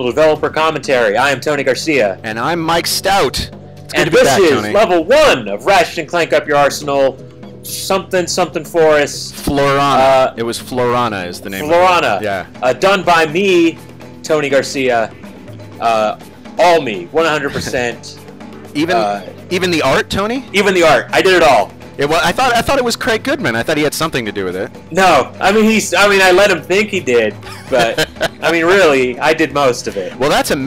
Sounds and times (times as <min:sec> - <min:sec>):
Speech: 0:00.0 - 0:15.1, 0:15.8 - 0:18.2, 0:18.8 - 0:30.6
Music: 0:00.0 - 0:30.6.